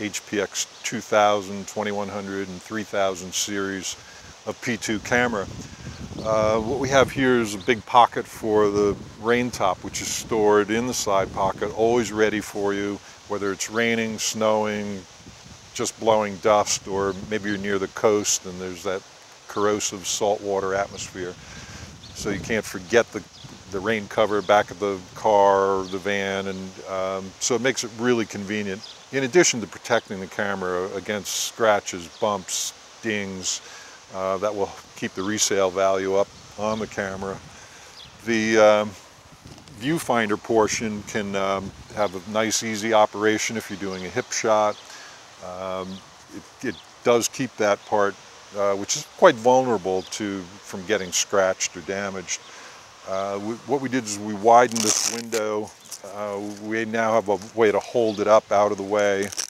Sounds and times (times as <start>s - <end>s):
Speech: 0.0s - 5.6s, 6.2s - 15.1s, 15.8s - 21.4s, 22.2s - 37.4s, 38.2s - 39.0s, 39.8s - 44.8s, 45.4s - 59.4s.